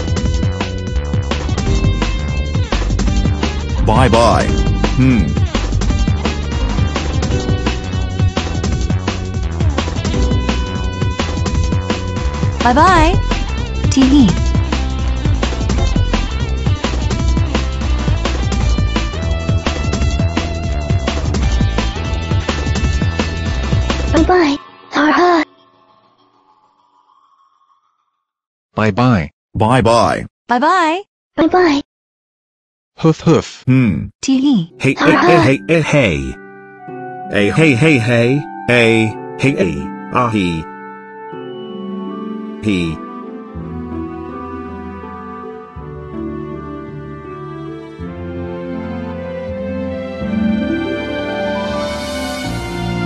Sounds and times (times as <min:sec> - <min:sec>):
Music: 0:00.0 - 0:26.7, 0:34.7 - 0:53.0
Speech: 0:03.8 - 0:05.4, 0:12.6 - 0:13.2, 0:13.9 - 0:14.4, 0:24.2 - 0:25.4, 0:28.8 - 0:31.8, 0:33.0 - 0:36.4, 0:37.3 - 0:40.7, 0:42.6 - 0:43.0.